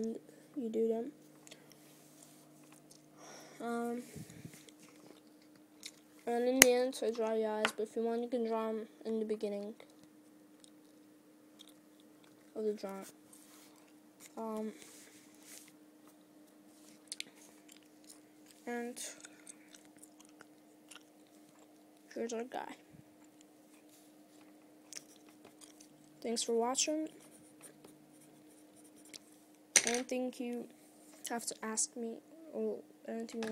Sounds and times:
Speech: 0.0 - 1.2, 3.6 - 4.1, 6.3 - 9.8, 12.6 - 13.1, 14.4 - 14.8, 18.7 - 19.2, 22.1 - 22.8, 26.2 - 27.2, 29.9 - 30.7, 31.3 - 33.5
Inside, small room: 0.0 - 33.5.

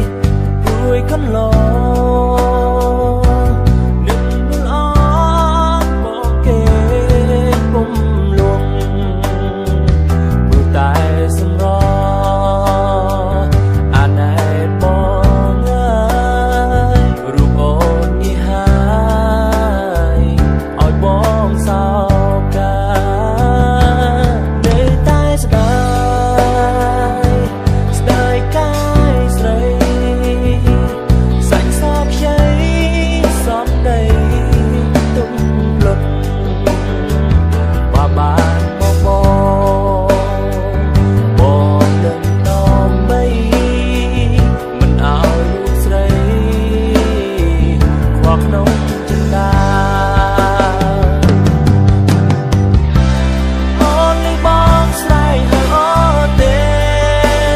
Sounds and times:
Acoustic guitar: 0.0 - 57.5.

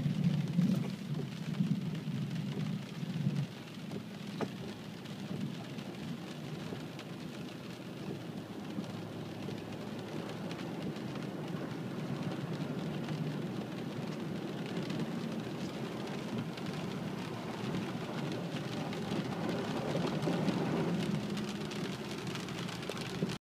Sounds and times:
Rain on surface: 0.0 - 23.4.

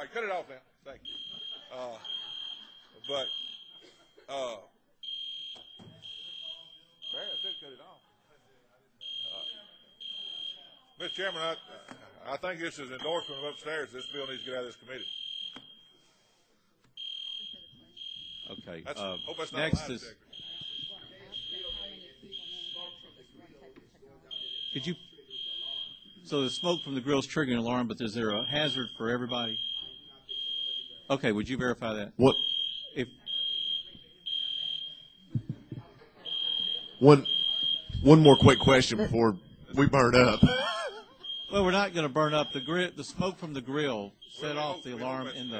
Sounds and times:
Speech: 0.0 - 2.1, 3.0 - 3.3, 4.2 - 4.7, 6.2 - 15.0, 17.7 - 32.4, 35.4 - 45.5
Buzzer: 1.0 - 3.8, 5.0 - 7.8, 9.0 - 11.7, 13.0 - 15.8, 17.0 - 23.1, 24.3 - 27.0, 28.4 - 31.1, 32.2 - 35.2, 36.2 - 39.0, 41.2 - 42.9, 44.2 - 45.5.

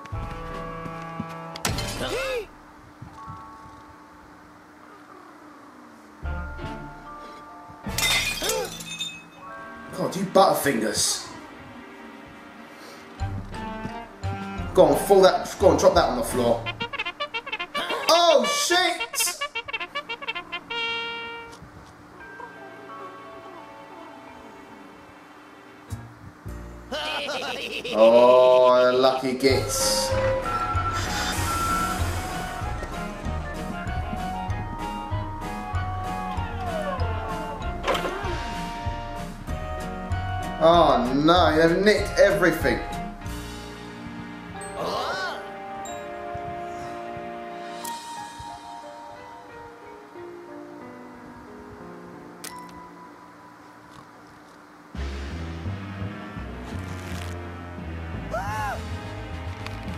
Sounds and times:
Music: 0.0 - 54.0, 54.9 - 59.9.

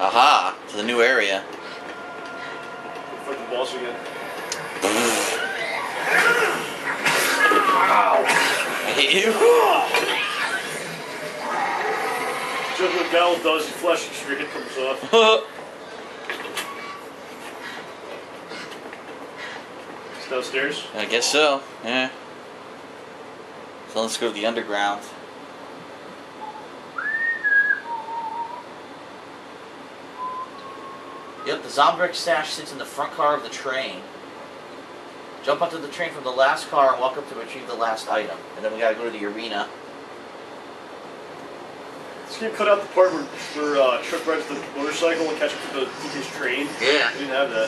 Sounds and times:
Speech: 3.2 - 4.0, 8.9 - 10.0, 12.8 - 15.5, 23.9 - 25.2, 31.4 - 34.1, 35.4 - 39.8, 42.3 - 47.6.

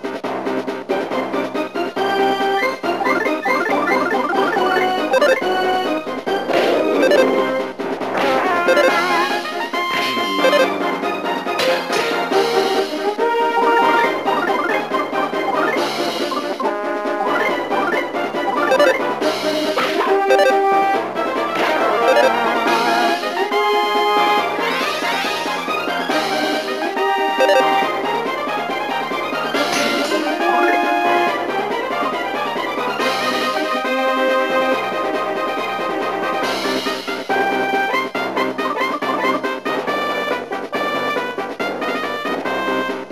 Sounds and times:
Music: 0.0 - 43.1.

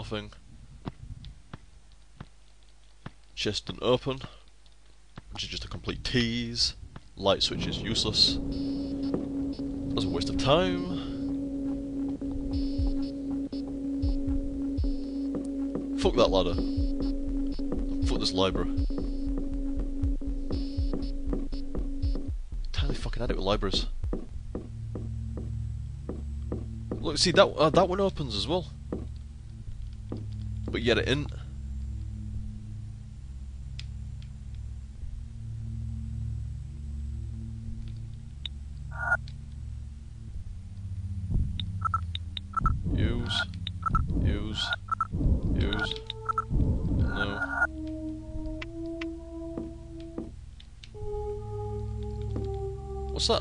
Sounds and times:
Speech: 0.0 - 0.4, 3.4 - 4.4, 5.4 - 8.4, 10.0 - 11.2, 16.0 - 16.6, 18.0 - 18.8, 22.8 - 23.9, 27.0 - 28.7, 30.7 - 31.4, 42.9 - 43.5, 44.2 - 44.8, 45.6 - 46.0, 47.2 - 47.5, 53.2 - 53.4.

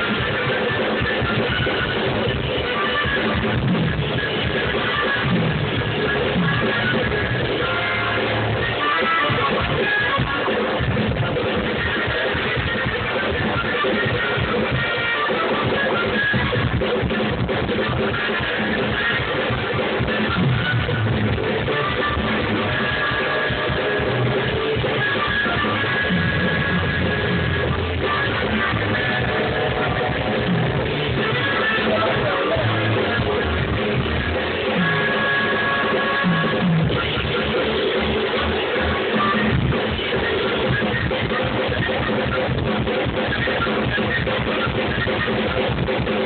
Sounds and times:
Music: 0.0 - 46.2.

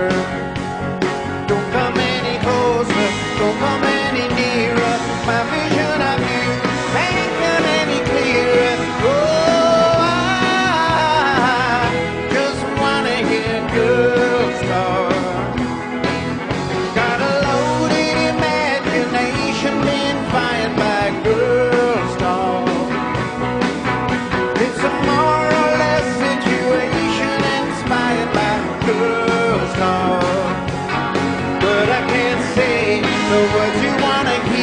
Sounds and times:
Music: 0.0 - 34.6
Male singing: 1.5 - 15.5, 17.0 - 22.9, 24.6 - 30.6, 31.6 - 34.6.

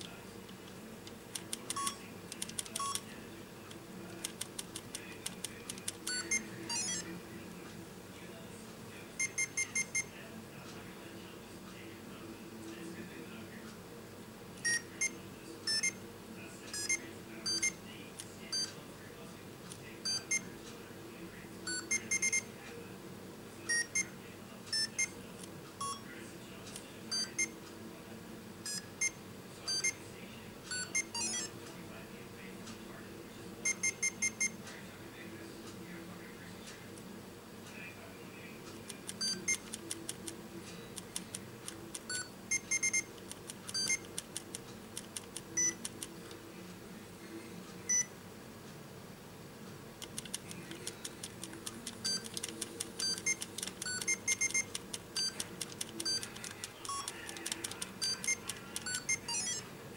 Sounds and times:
Inside, small room: 0.0 - 59.9.

